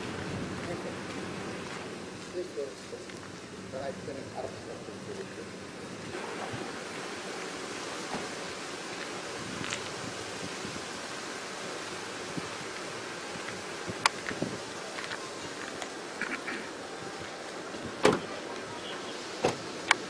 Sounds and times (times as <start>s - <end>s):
Rustle: 0.0s - 20.0s.